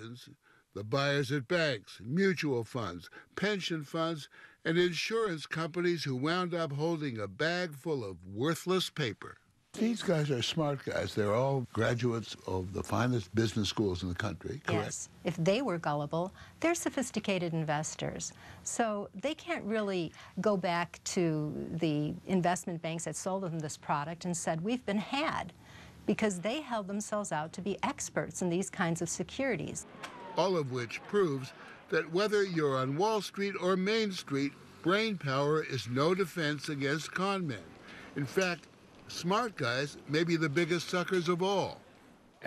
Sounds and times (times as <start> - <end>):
Speech: 0.0 - 25.5, 30.4 - 41.8.